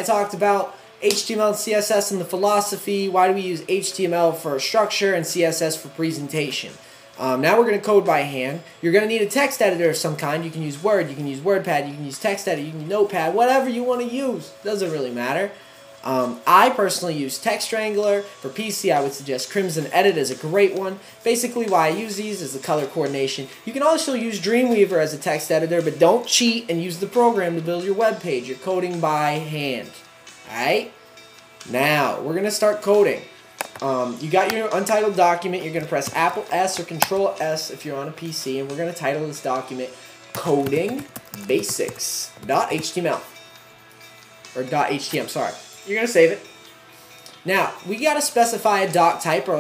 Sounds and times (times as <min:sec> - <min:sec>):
Speech: 0:00.0 - 0:31.0, 0:31.7 - 0:43.3, 0:44.6 - 0:46.5, 0:47.5 - 0:49.6
Music: 0:00.0 - 0:49.6.